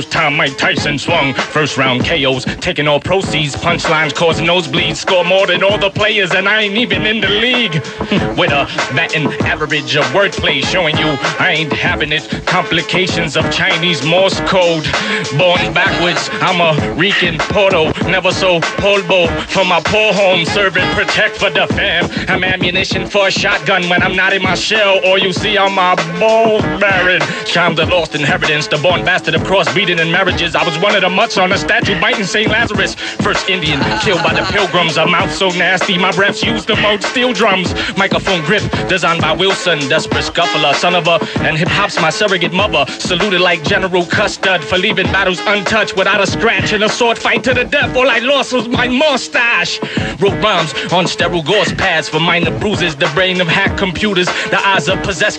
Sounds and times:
Music: 0:00.0 - 0:55.3.

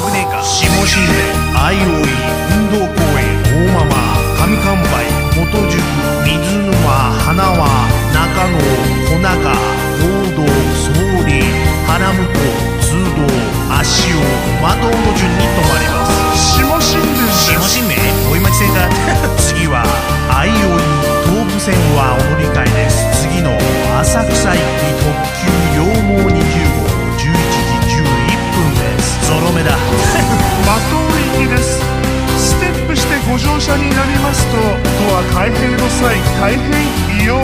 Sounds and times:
Speech: 0:00.0 - 0:31.8, 0:32.4 - 0:37.4
Music: 0:00.0 - 0:37.4.

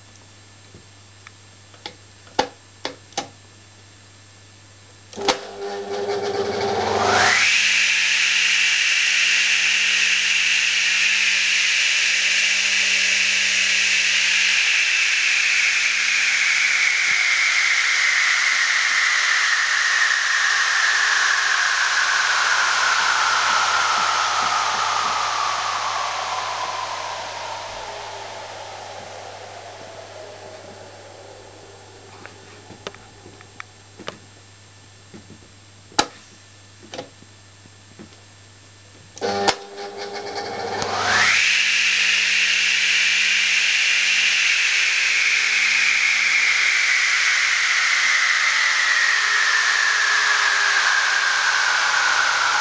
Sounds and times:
Power tool: 0:05.2 - 0:33.7, 0:39.2 - 0:52.6.

